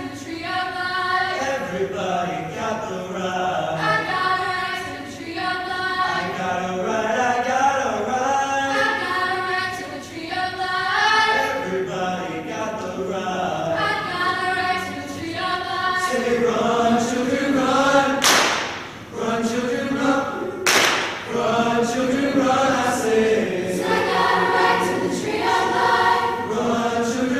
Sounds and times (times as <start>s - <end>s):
Choir: 0.0s - 27.3s.